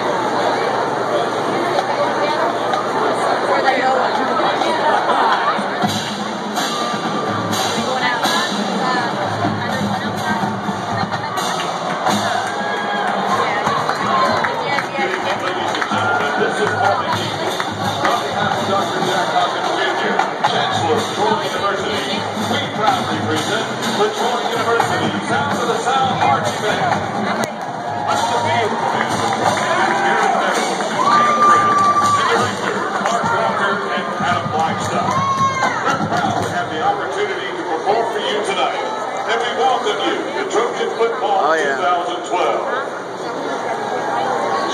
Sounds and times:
Cheering: 0.0s - 8.0s, 10.7s - 21.6s, 24.2s - 36.6s
Crowd: 0.0s - 44.7s
Music: 5.4s - 37.7s
Speech: 7.5s - 11.7s, 13.2s - 44.7s.

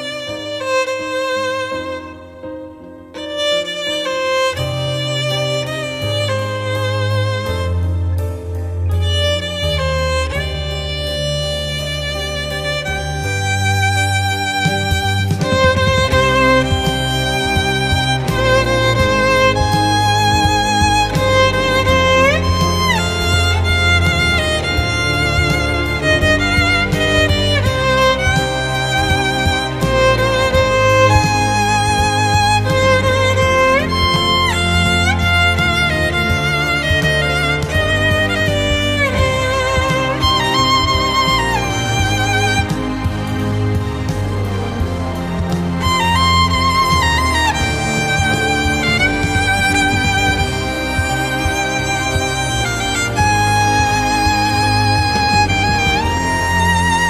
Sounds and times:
Music: 0.0s - 57.1s.

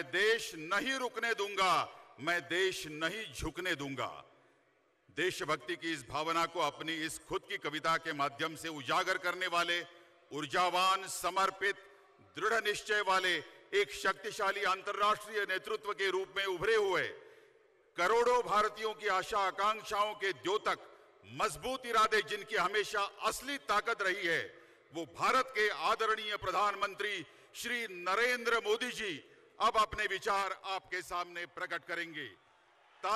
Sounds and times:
Male speech, man speaking: 0.0s - 4.3s, 5.2s - 17.2s, 18.0s - 32.4s
Narration, monologue: 0.0s - 33.1s.

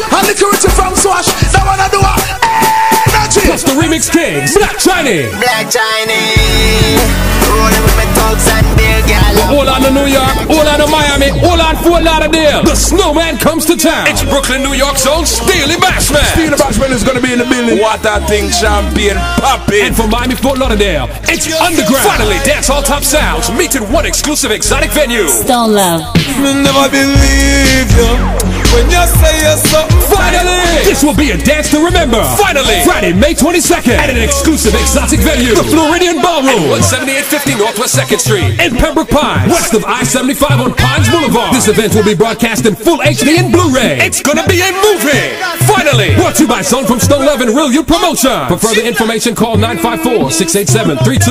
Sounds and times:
Speech: 0.0s - 2.4s, 3.0s - 7.0s, 9.3s - 27.2s, 28.8s - 51.3s
Reggae: 0.0s - 51.3s.

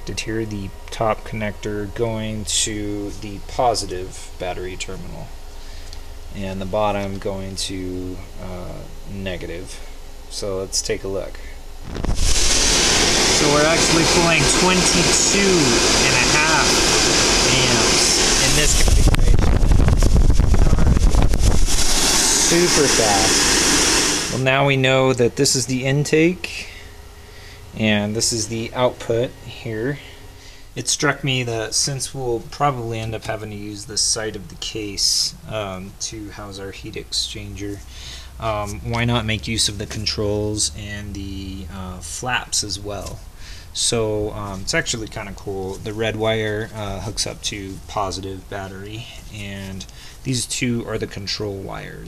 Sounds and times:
Engine: 0.0s - 31.0s, 37.3s - 44.6s.

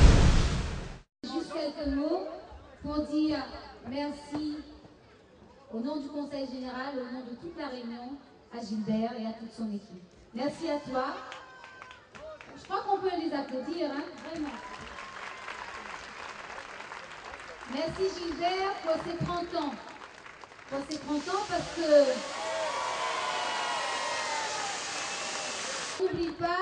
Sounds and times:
Speech: 17.7s - 19.8s, 26.0s - 26.6s.

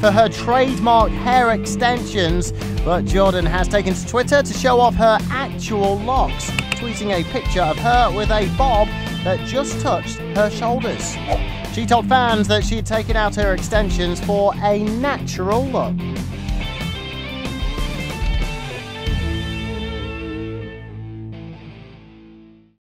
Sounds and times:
Speech: 0.0s - 16.0s
Music: 0.0s - 22.8s.

